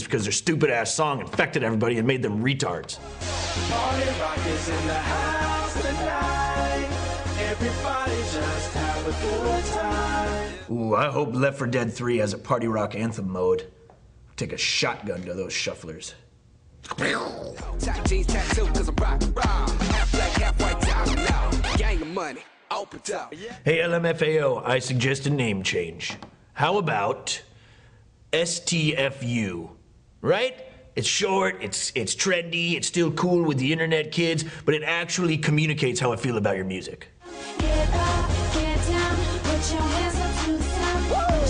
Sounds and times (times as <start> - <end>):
Speech: 0.0 - 3.0, 10.7 - 13.7, 14.4 - 16.3, 22.0 - 27.5, 28.4 - 37.1
Techno: 3.0 - 10.7, 17.6 - 23.5, 37.3 - 41.5.